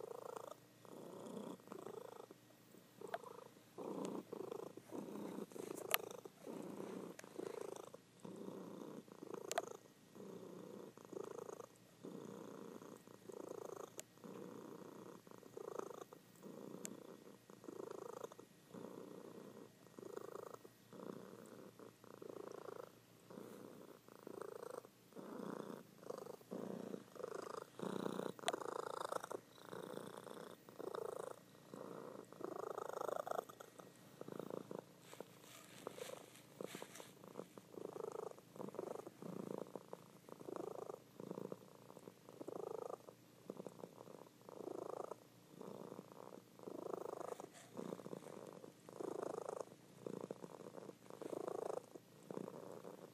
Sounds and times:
Purr: 0.0 - 2.4, 3.0 - 53.1.

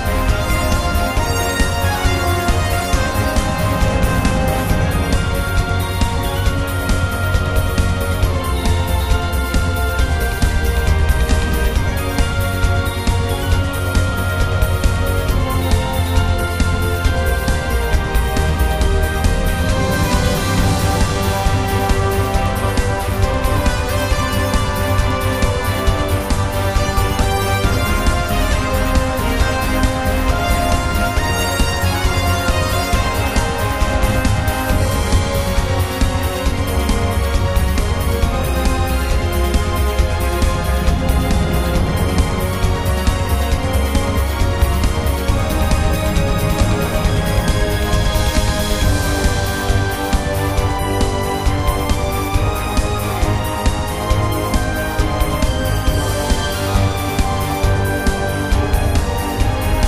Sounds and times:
Music: 0.0 - 59.8.

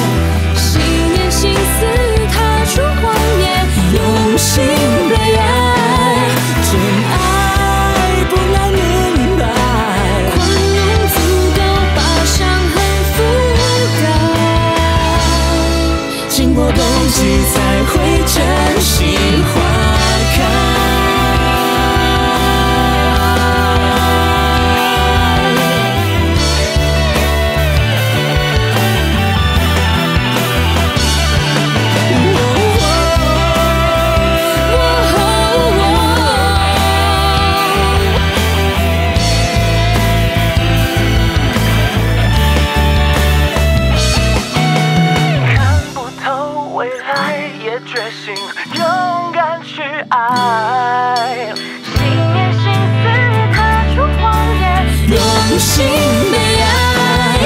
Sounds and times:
Theme music: 0.0 - 46.2
Rock music: 0.0 - 57.4.

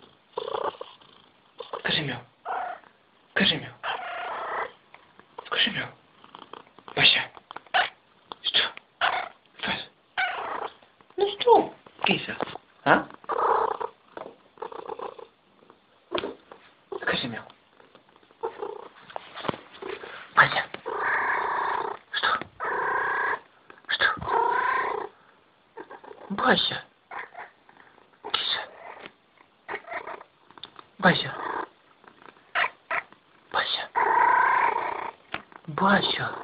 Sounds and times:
Purr: 0.0 - 2.8, 6.2 - 7.9, 13.0 - 16.4, 17.7 - 19.0, 20.8 - 25.2, 28.6 - 36.4
Speech: 1.8 - 2.3, 3.4 - 3.8, 5.5 - 6.0, 7.0 - 7.4, 11.2 - 13.2, 17.0 - 17.5, 20.4 - 20.8, 26.3 - 26.9, 28.3 - 28.7, 31.0 - 31.4, 33.6 - 34.0, 35.7 - 36.4.

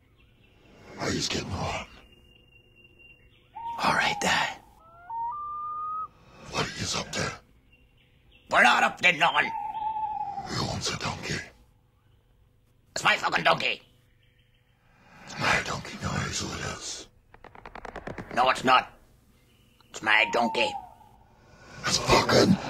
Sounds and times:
Speech: 6.5 - 7.4, 8.5 - 9.5, 10.5 - 11.6, 12.9 - 13.8, 15.3 - 17.1, 18.3 - 19.0, 19.9 - 20.8, 21.8 - 22.6.

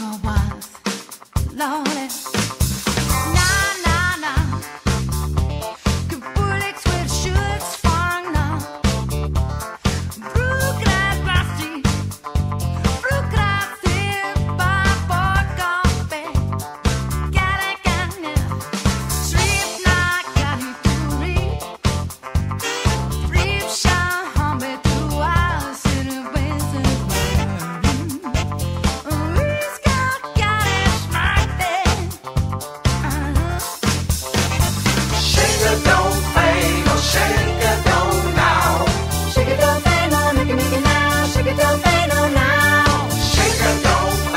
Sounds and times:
Music: 0.0 - 44.3.

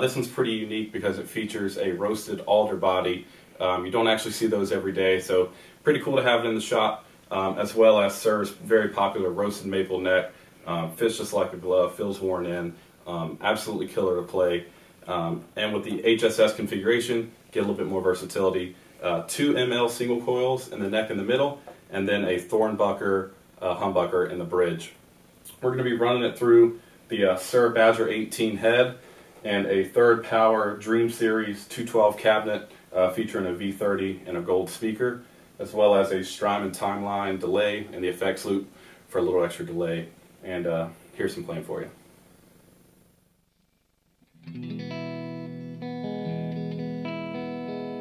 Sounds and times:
Speech: 0.0 - 42.0.

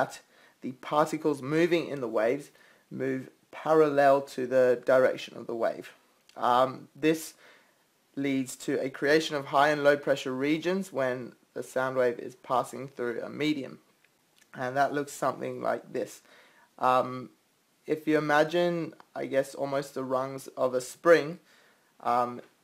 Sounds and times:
Speech: 0.0 - 7.4, 8.2 - 13.9, 14.5 - 22.6.

